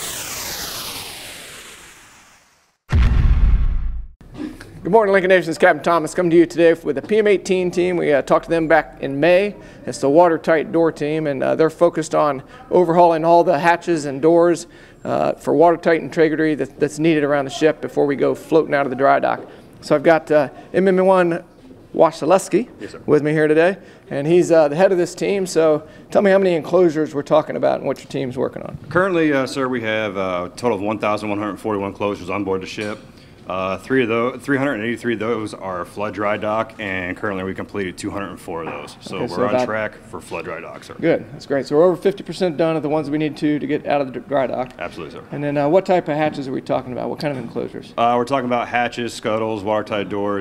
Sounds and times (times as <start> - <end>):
Speech: 22.0 - 50.4.